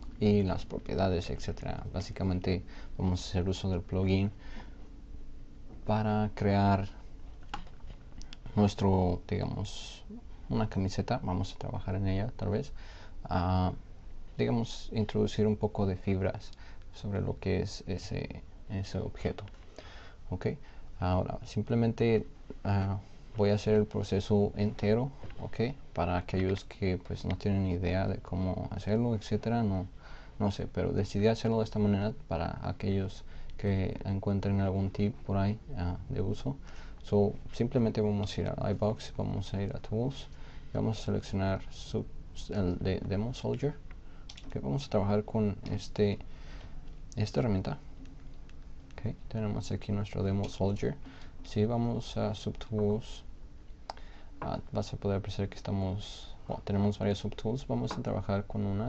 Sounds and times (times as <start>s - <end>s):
Speech: 0.2s - 4.4s, 5.8s - 7.0s, 8.4s - 19.6s, 20.3s - 43.8s, 44.4s - 46.2s, 47.1s - 47.9s, 48.9s - 53.3s, 54.4s - 58.8s.